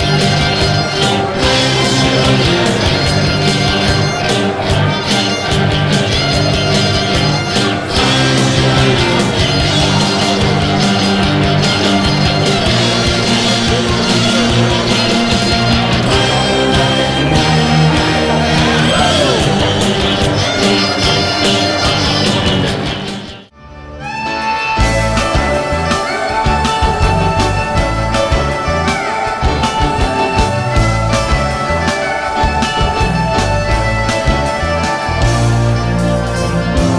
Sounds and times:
Rock and roll: 0:00.0 - 0:36.9.

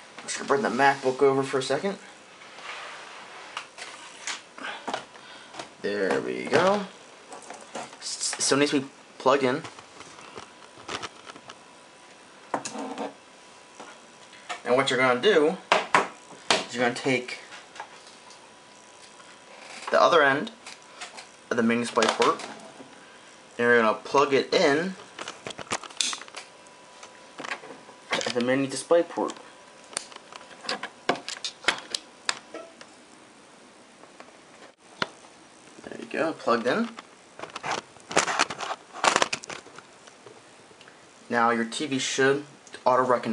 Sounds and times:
Speech: 0:00.2 - 0:02.1, 0:05.8 - 0:06.9, 0:08.0 - 0:09.7, 0:14.6 - 0:15.7, 0:16.6 - 0:17.4, 0:19.9 - 0:20.6, 0:21.5 - 0:22.5, 0:23.6 - 0:25.0, 0:28.2 - 0:29.4, 0:35.8 - 0:37.0, 0:41.3 - 0:43.3.

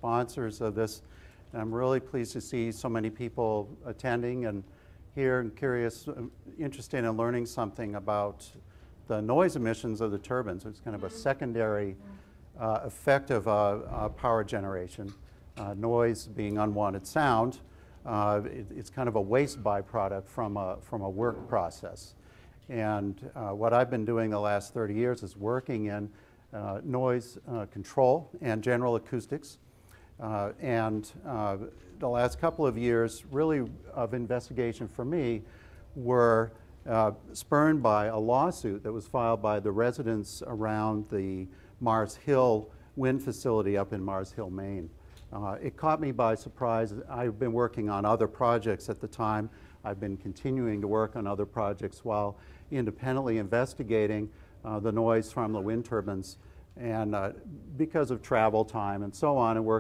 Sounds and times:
Speech: 0:00.0 - 0:29.6, 0:30.2 - 0:35.4, 0:36.0 - 0:59.8.

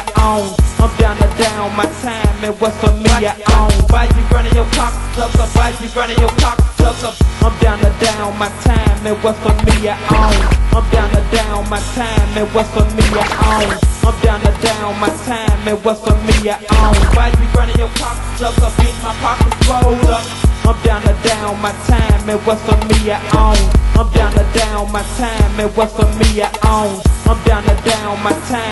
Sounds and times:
Music: 0:00.0 - 0:28.7.

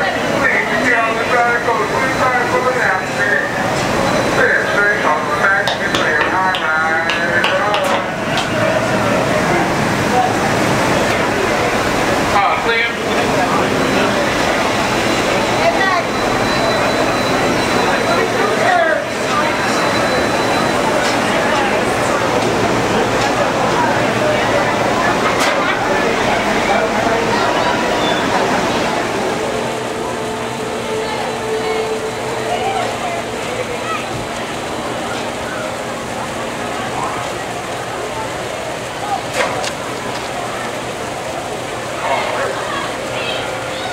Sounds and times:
Speech: 0:00.0 - 0:43.9.

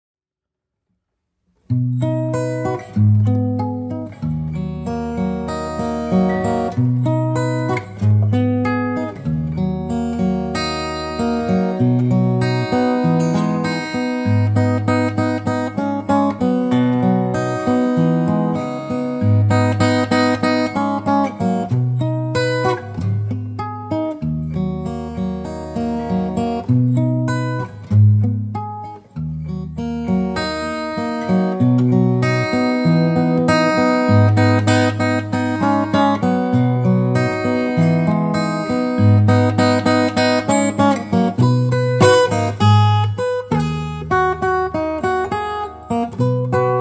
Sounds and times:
Acoustic guitar: 0:01.0 - 0:46.8.

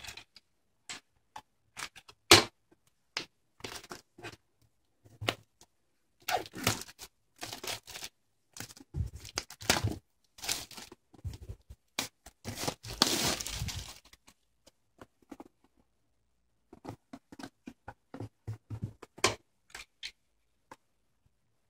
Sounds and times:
Inside, small room: 0:00.0 - 0:21.6
Crumpling, crinkling: 0:06.3 - 0:11.0, 0:12.4 - 0:14.4.

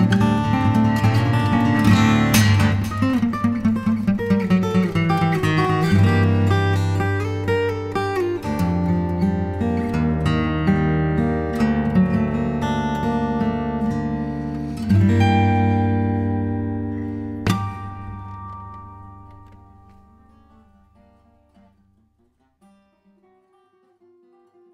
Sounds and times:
Strum: 0:00.0 - 0:24.7.

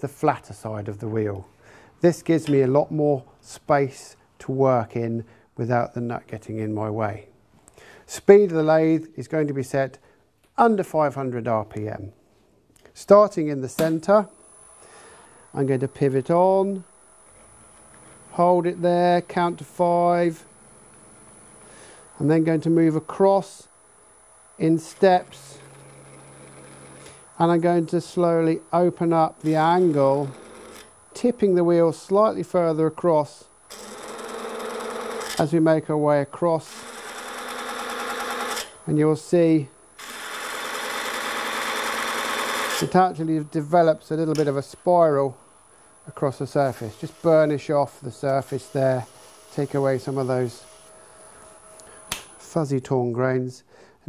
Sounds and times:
Speech: 0:00.0 - 0:07.3, 0:08.1 - 0:10.0, 0:10.6 - 0:12.2, 0:13.0 - 0:14.4, 0:15.6 - 0:16.9, 0:18.3 - 0:20.5, 0:22.2 - 0:23.7, 0:24.6 - 0:25.6, 0:27.4 - 0:30.4, 0:31.2 - 0:33.5, 0:35.4 - 0:36.8, 0:38.9 - 0:39.8, 0:42.8 - 0:45.4, 0:46.1 - 0:50.7, 0:52.4 - 0:54.0.

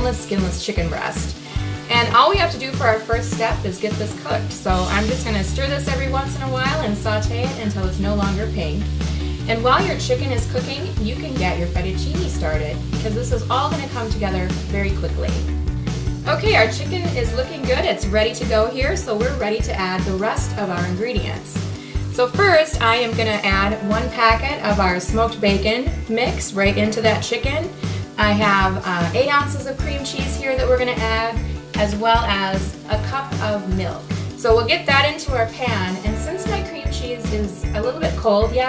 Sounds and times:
Speech: 0:00.0 - 0:08.9, 0:09.5 - 0:15.4, 0:16.3 - 0:21.6, 0:22.2 - 0:38.6
Music: 0:00.0 - 0:38.6.

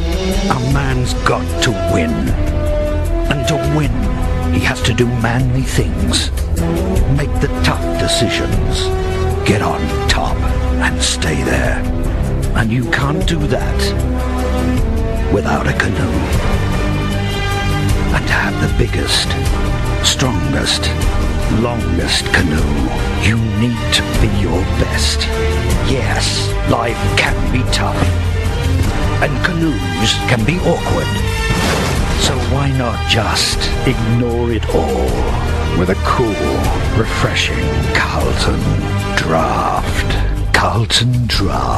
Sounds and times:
Music: 0:00.0 - 0:41.7
Speech: 0:00.4 - 0:02.4, 0:03.3 - 0:06.4, 0:07.1 - 0:11.9, 0:12.5 - 0:14.0, 0:15.3 - 0:16.4, 0:18.1 - 0:28.2, 0:29.2 - 0:31.2, 0:32.2 - 0:41.7.

